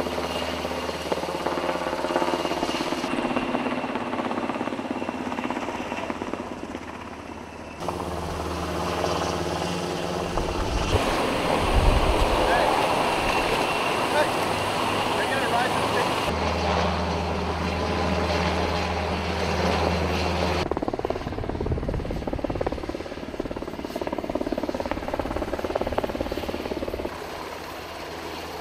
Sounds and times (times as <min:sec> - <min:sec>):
Helicopter: 0:00.0 - 0:28.6
Speech: 0:12.4 - 0:12.8, 0:14.1 - 0:14.4, 0:15.1 - 0:16.2.